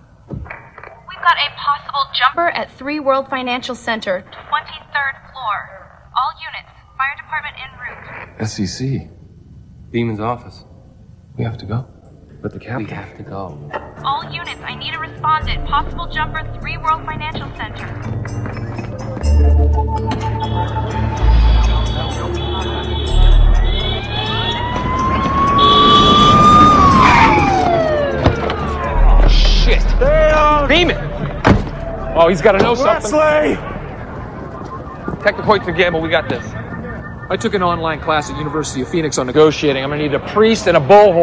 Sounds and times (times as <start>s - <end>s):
Police car (siren): 20.4s - 39.3s.